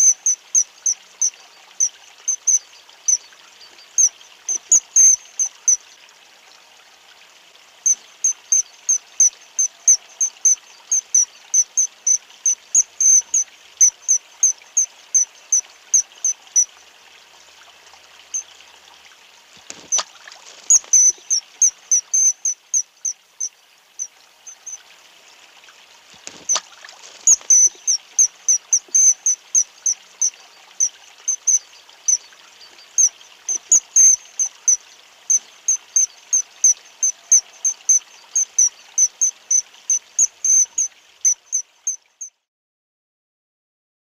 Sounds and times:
Bird vocalization, bird call, bird song: 0.0 - 5.8, 20.7 - 23.2, 27.3 - 42.4.

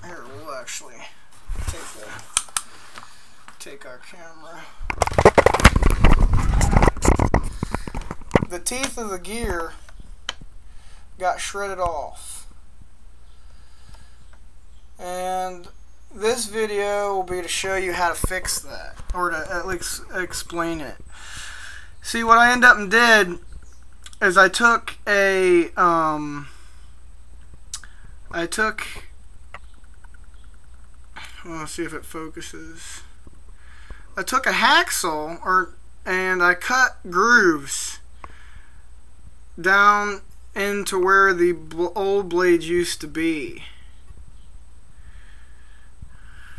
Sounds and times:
Speech: 0.0 - 2.3, 3.6 - 4.8, 8.4 - 9.8, 11.2 - 12.5, 15.0 - 21.0, 22.0 - 23.4, 24.1 - 26.5, 28.3 - 29.1, 31.2 - 33.2, 34.2 - 38.1, 39.6 - 43.8.

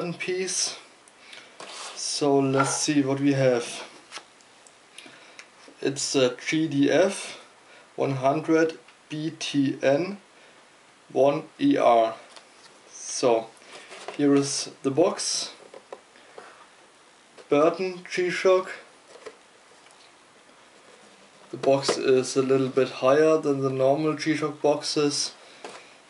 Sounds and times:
Speech: 0.0 - 0.9, 2.0 - 3.9, 5.8 - 10.2, 11.1 - 12.3, 13.0 - 13.5, 14.2 - 15.6, 17.5 - 18.9, 21.6 - 25.4.

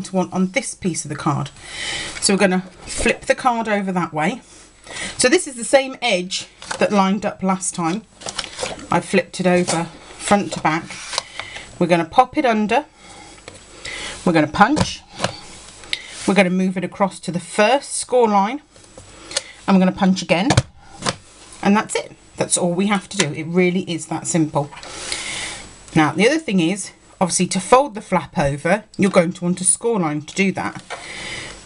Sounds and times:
Speech: 0.0 - 1.6, 2.2 - 4.4, 5.2 - 8.1, 8.9 - 11.0, 11.8 - 12.9, 14.2 - 15.0, 16.2 - 18.7, 19.7 - 20.6, 21.6 - 24.8, 25.9 - 30.8.

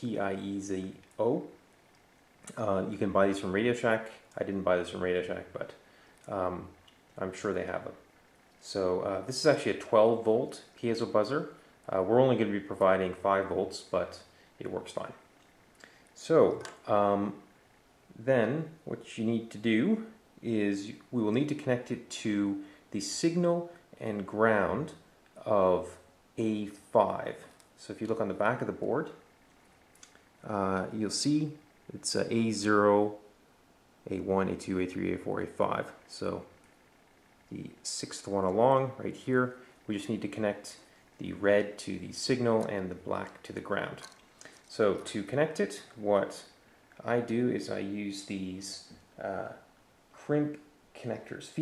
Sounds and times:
Speech: 0.0 - 1.6, 2.5 - 15.3, 16.2 - 17.5, 18.1 - 29.2, 30.4 - 33.3, 34.0 - 36.6, 37.5 - 44.1, 44.7 - 51.6.

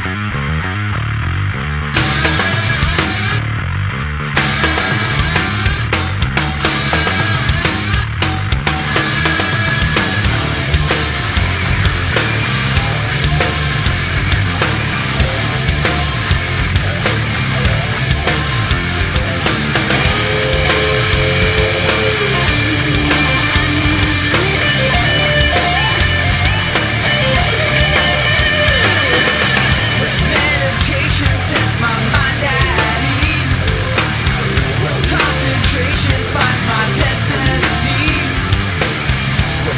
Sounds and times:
Heavy metal: 0.0 - 39.7.

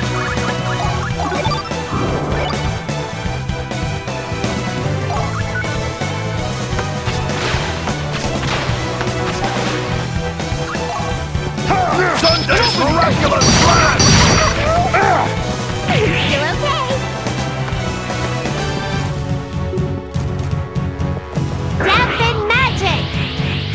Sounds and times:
Music: 0.0 - 23.7.

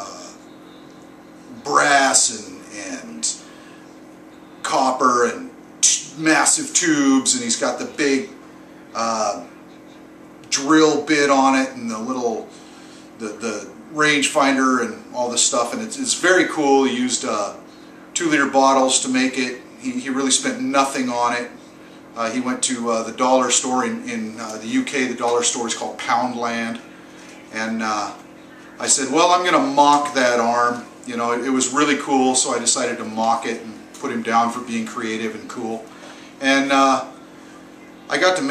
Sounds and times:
Speech: 0.0 - 0.4, 1.5 - 3.5, 4.6 - 12.6, 13.2 - 38.5.

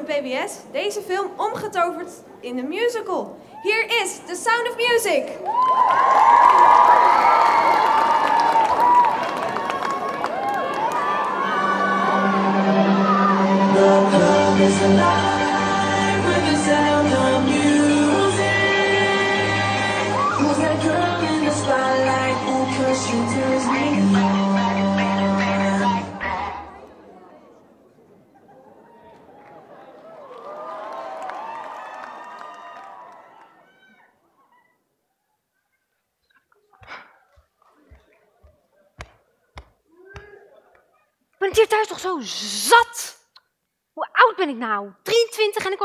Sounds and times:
Music: 11.7 - 26.8.

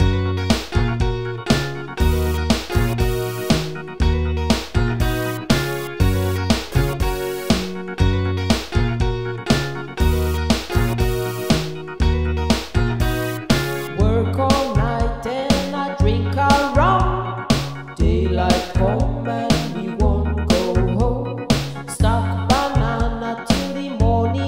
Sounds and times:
Music: 0.0 - 24.4.

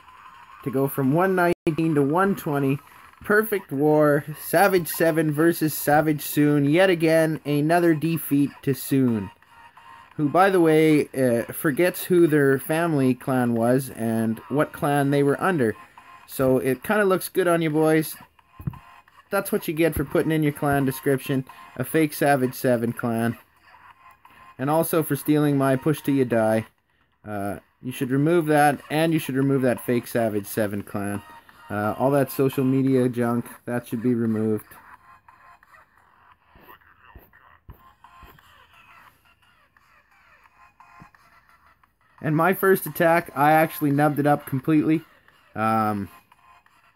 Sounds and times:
Inside, small room: 0.0 - 46.9
Music: 0.0 - 46.9
Speech: 0.6 - 9.3, 10.2 - 18.2, 19.3 - 23.4, 24.6 - 26.7, 27.3 - 34.8, 42.2 - 46.1.

